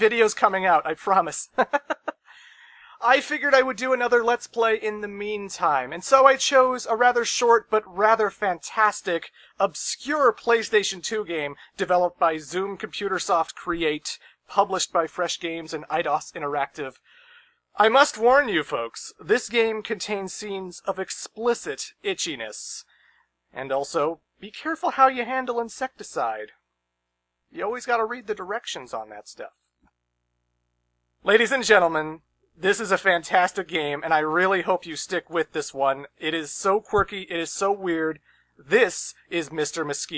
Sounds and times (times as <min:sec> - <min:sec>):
Speech: 0:00.0 - 0:02.1, 0:02.9 - 0:17.0, 0:17.8 - 0:22.9, 0:23.6 - 0:26.5, 0:27.6 - 0:29.6, 0:31.3 - 0:40.1.